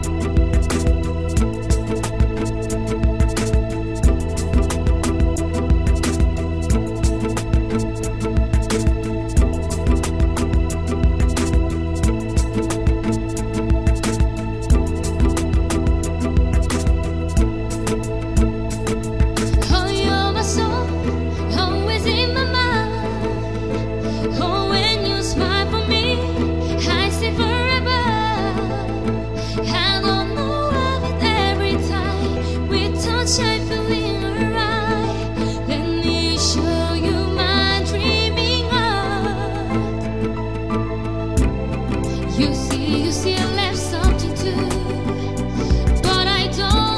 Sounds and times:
Music: 0.0s - 46.9s.

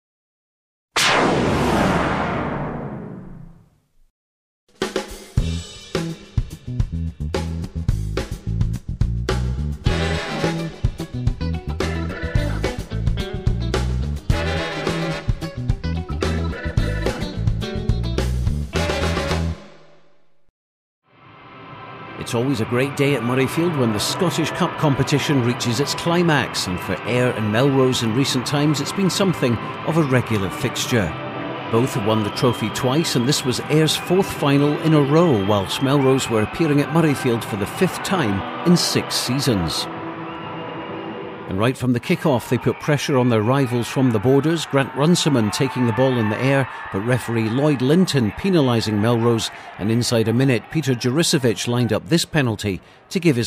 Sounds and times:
Swing music: 4.8s - 19.8s, 22.3s - 40.3s.

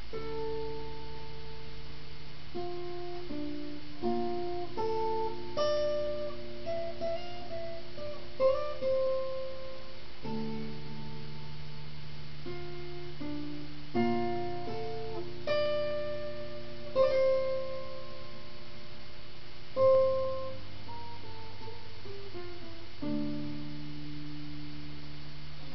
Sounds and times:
Acoustic guitar: 0.0s - 25.7s.

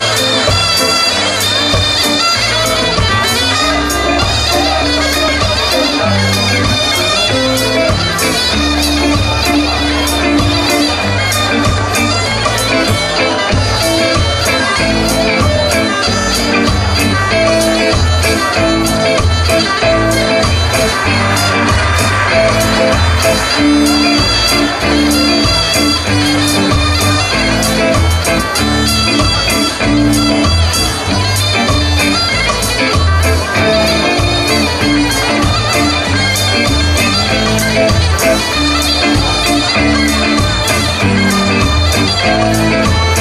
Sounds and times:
Folk music: 0.0s - 43.2s.

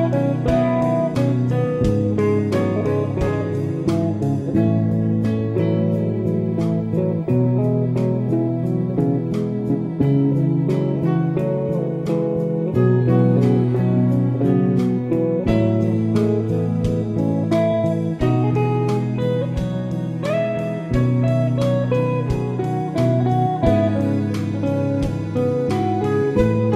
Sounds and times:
Music: 0.0s - 26.7s.

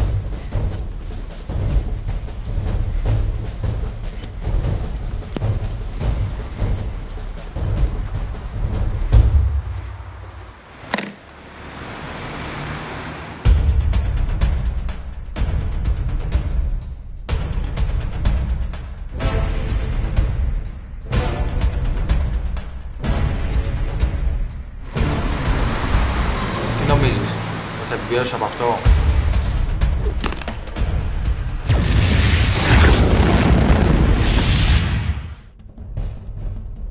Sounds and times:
Music: 0.0s - 10.6s, 13.4s - 36.9s
Speech: 26.8s - 28.9s.

